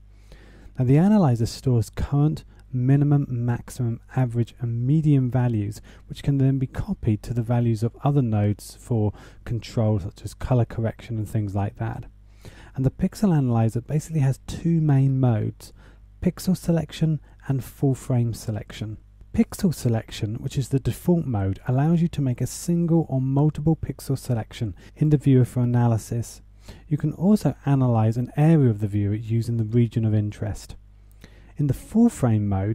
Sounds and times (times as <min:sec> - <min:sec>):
Speech: 0:00.8 - 0:12.1, 0:12.7 - 0:30.8, 0:31.6 - 0:32.7.